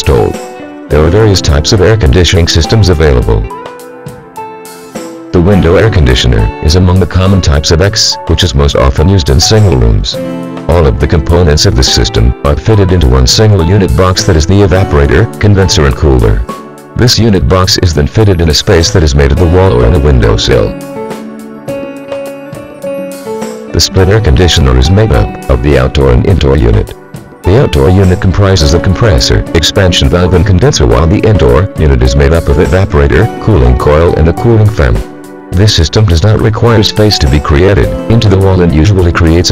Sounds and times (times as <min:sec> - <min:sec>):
Speech: 0:00.0 - 0:03.5, 0:05.3 - 0:20.8, 0:23.8 - 0:39.5
Music: 0:00.0 - 0:39.5.